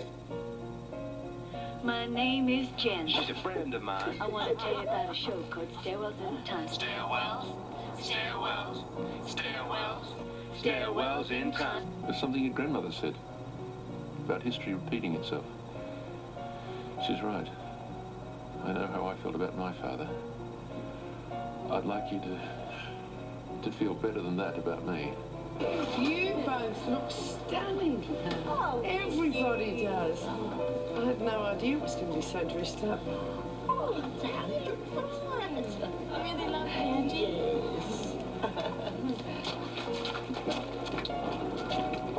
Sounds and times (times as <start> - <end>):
Music: 0.0 - 42.1.